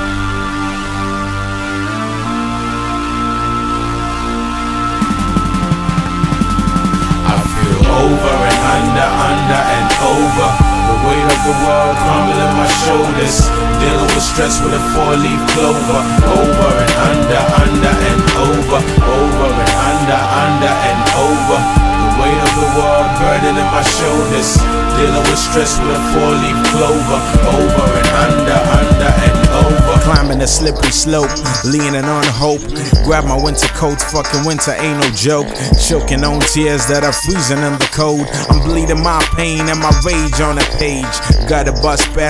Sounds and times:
Music: 0:00.0 - 0:42.2.

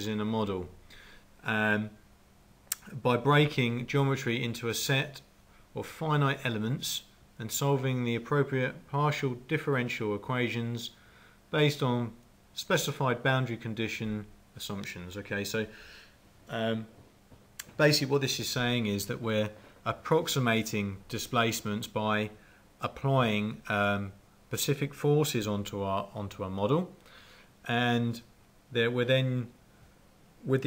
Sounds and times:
Speech: 0:00.0 - 0:00.8, 0:01.4 - 0:02.0, 0:02.8 - 0:15.7, 0:16.5 - 0:17.0, 0:17.6 - 0:27.0, 0:27.7 - 0:29.6, 0:30.4 - 0:30.6.

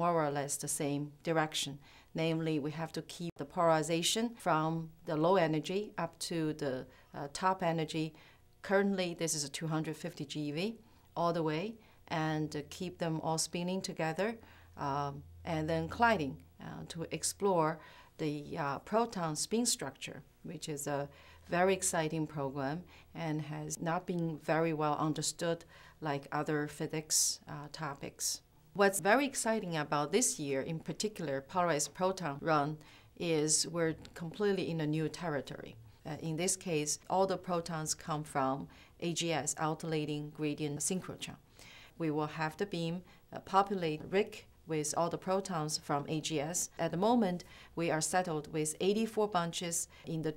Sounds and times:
Speech: 0:00.0 - 0:41.4, 0:42.0 - 0:50.3.

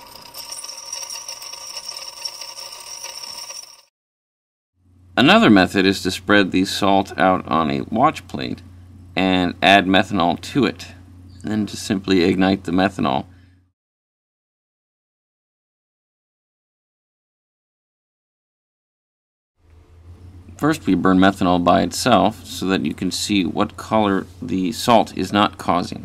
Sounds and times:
Speech: 0:05.2 - 0:08.6, 0:09.2 - 0:13.3, 0:20.6 - 0:26.0.

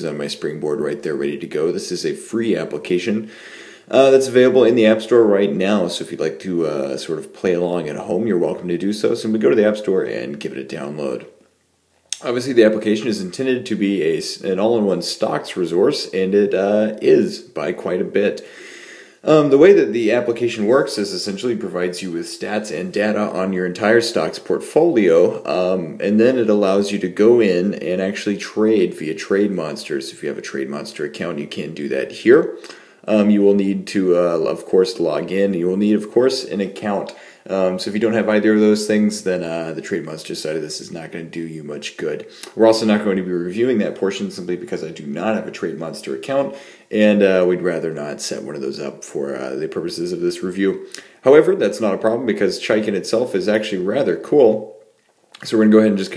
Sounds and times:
Speech: 0:00.0 - 0:03.3, 0:03.9 - 0:11.4, 0:12.1 - 0:18.5, 0:19.2 - 0:54.8, 0:55.4 - 0:56.1.

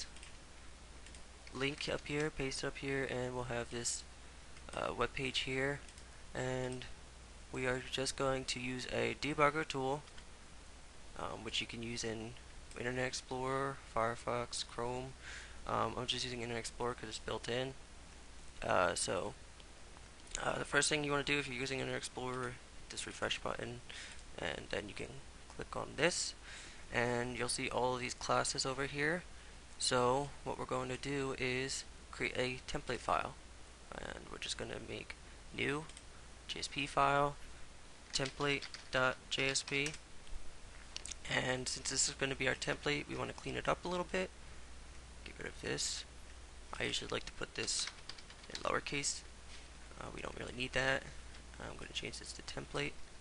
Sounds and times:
Speech: 0:01.5 - 0:04.1, 0:04.7 - 0:10.1, 0:11.2 - 0:17.8, 0:18.6 - 0:19.4, 0:20.4 - 0:37.4, 0:38.1 - 0:40.0, 0:41.0 - 0:44.3, 0:45.2 - 0:46.1, 0:46.7 - 0:49.3, 0:50.0 - 0:53.0.

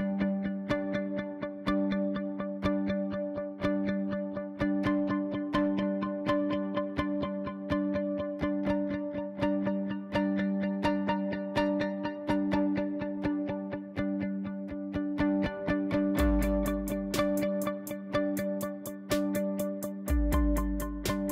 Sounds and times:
Music: 0:00.0 - 0:21.3.

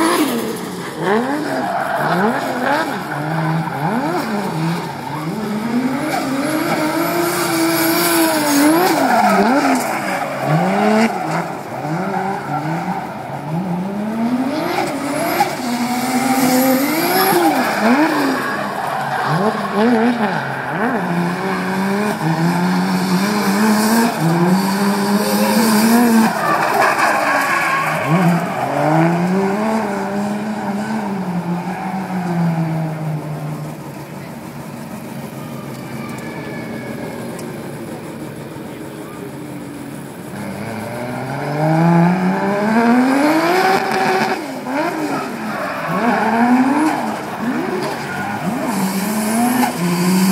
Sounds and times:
Race car, auto racing: 0:00.0 - 0:50.3
Skidding: 0:00.0 - 0:50.3.

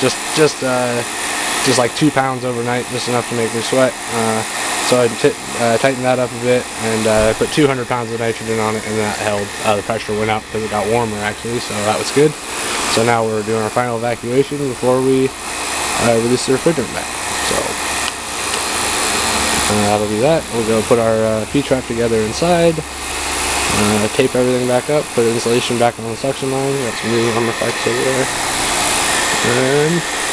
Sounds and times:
Speech: 0:00.0 - 0:01.1, 0:01.7 - 0:15.3, 0:16.0 - 0:17.8, 0:19.6 - 0:22.9, 0:23.7 - 0:28.3, 0:29.3 - 0:30.1.

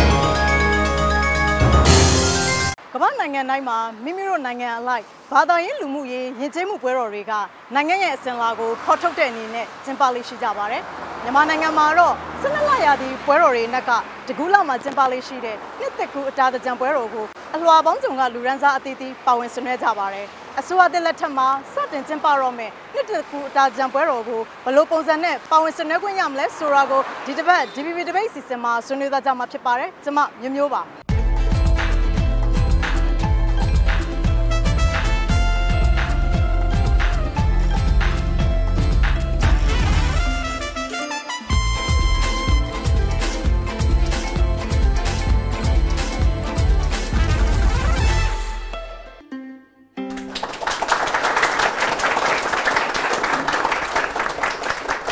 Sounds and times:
Music: 0:00.0 - 0:02.8, 0:31.1 - 0:51.0
Speech: 0:02.9 - 0:30.9.

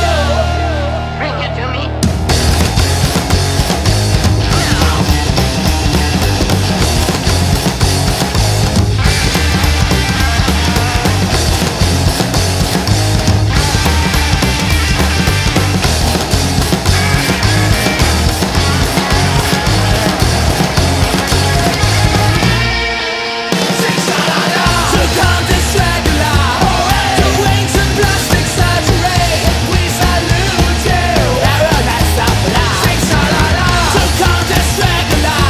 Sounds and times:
Progressive rock: 0:00.0 - 0:35.5.

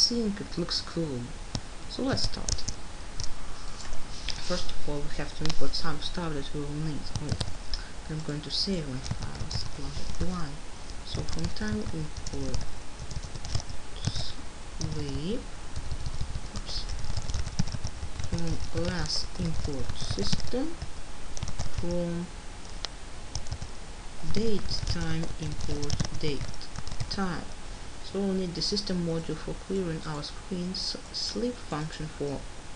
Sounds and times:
Speech: 0:00.0 - 0:02.7, 0:04.4 - 0:07.4, 0:08.0 - 0:12.6, 0:14.0 - 0:15.5, 0:16.6 - 0:16.9, 0:18.3 - 0:20.8, 0:21.8 - 0:22.3, 0:24.2 - 0:26.5, 0:27.1 - 0:27.5, 0:28.1 - 0:32.4.

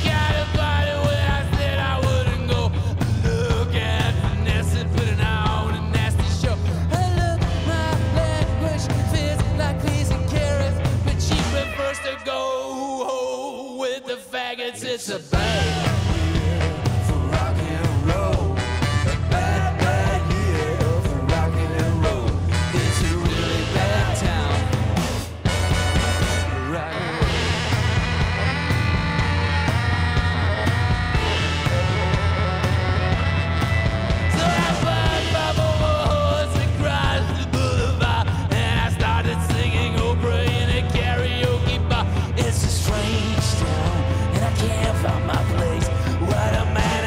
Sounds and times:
Rock and roll: 0:00.0 - 0:47.0.

